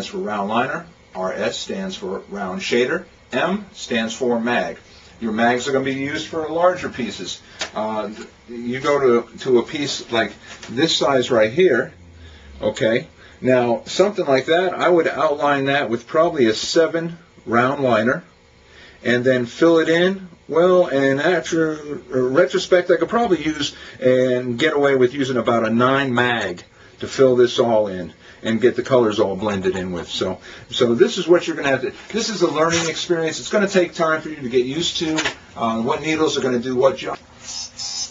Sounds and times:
Speech: 0.0 - 12.0, 12.6 - 18.3, 19.0 - 37.2.

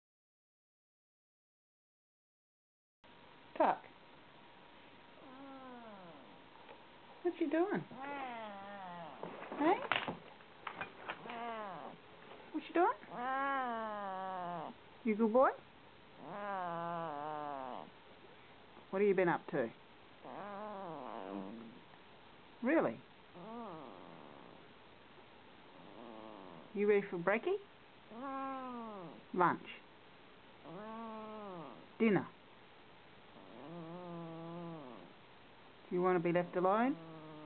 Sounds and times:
Speech: 3.6 - 3.9, 7.2 - 7.9, 9.6 - 9.9, 12.5 - 13.1, 15.1 - 15.6, 18.9 - 19.8, 22.6 - 23.0, 26.8 - 27.7, 29.3 - 29.8, 32.0 - 32.4, 35.9 - 37.0
Cat: 5.2 - 6.4, 7.8 - 12.0, 12.9 - 14.8, 16.2 - 17.9, 20.2 - 21.8, 23.4 - 24.6, 25.7 - 26.7, 28.1 - 29.2, 30.6 - 31.9, 33.4 - 35.1, 36.9 - 37.4.

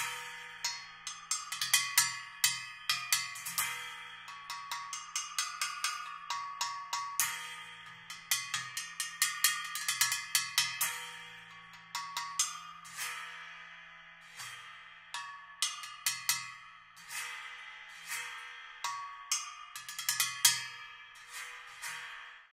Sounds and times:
Percussion: 0.0 - 22.5.

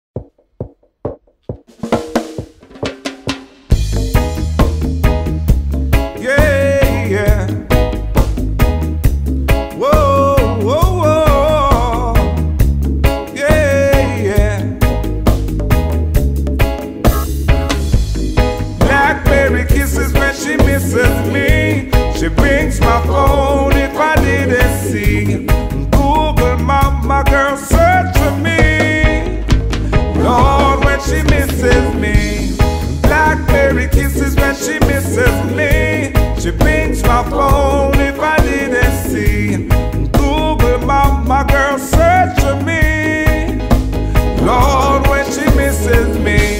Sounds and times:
Bass drum: 0.1 - 46.5
Drum kit: 0.1 - 46.5.

